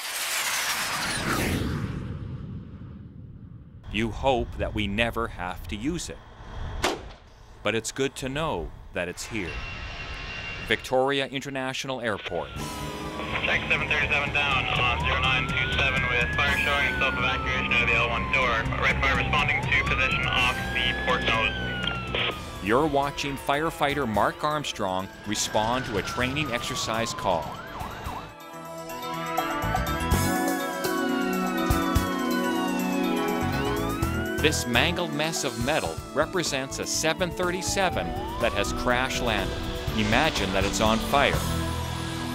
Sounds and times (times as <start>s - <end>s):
Speech: 3.9s - 6.2s, 7.7s - 9.6s, 10.7s - 12.6s, 13.3s - 21.6s, 22.6s - 27.5s, 34.4s - 41.5s
Fire engine, fire truck (siren): 12.2s - 28.6s, 29.2s - 42.3s
Music: 12.5s - 42.3s.